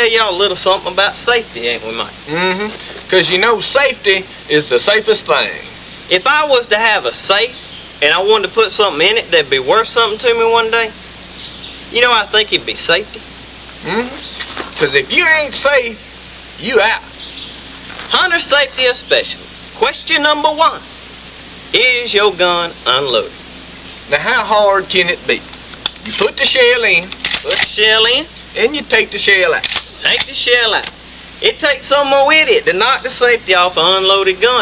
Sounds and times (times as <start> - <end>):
Speech: 0.0 - 11.0, 11.9 - 17.1, 18.1 - 20.9, 21.7 - 23.4, 24.1 - 34.6.